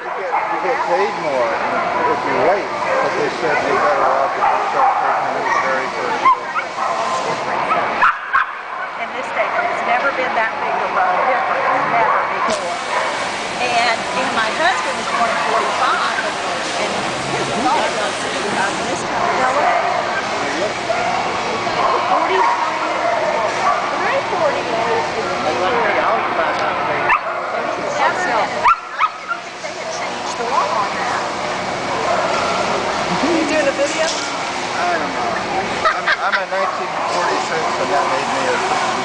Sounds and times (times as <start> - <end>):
Bow-wow: 0.0 - 9.0, 10.7 - 13.2, 20.9 - 24.0, 27.1 - 27.6, 28.6 - 29.5.